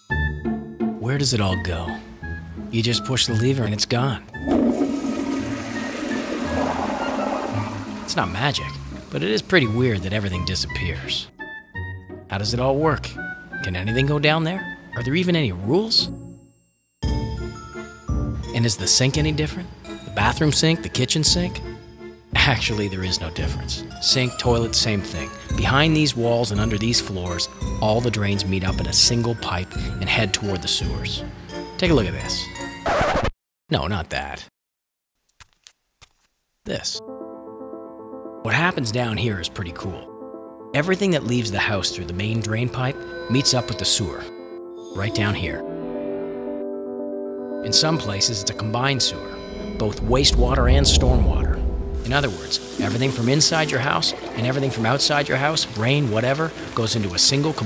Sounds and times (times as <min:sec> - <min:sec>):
Music: 0:00.0 - 0:33.1, 0:36.8 - 0:57.6
Speech: 0:01.0 - 0:02.1, 0:02.7 - 0:04.3, 0:08.1 - 0:11.3, 0:12.3 - 0:16.1, 0:18.5 - 0:21.6, 0:22.4 - 0:31.2, 0:31.8 - 0:32.6, 0:33.7 - 0:34.5, 0:36.7 - 0:37.0, 0:38.5 - 0:40.1, 0:40.8 - 0:44.3, 0:45.0 - 0:45.6, 0:47.7 - 0:49.2, 0:49.8 - 0:57.6
Water: 0:04.4 - 0:09.9, 0:49.6 - 0:57.6.